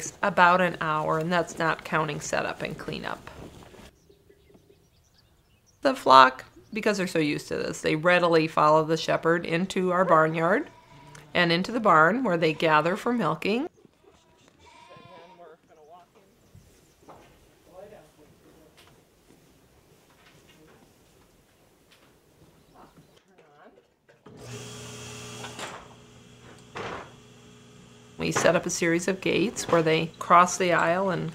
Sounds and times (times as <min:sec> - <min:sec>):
Bleat: 0:10.6 - 0:11.3, 0:14.1 - 0:15.5.